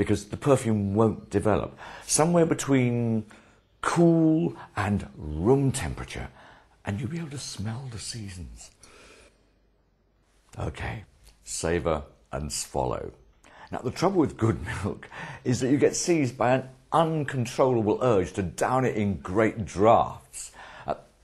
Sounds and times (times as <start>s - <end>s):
Speech: 0.0s - 8.8s, 10.5s - 21.1s
Inside, small room: 0.0s - 21.2s.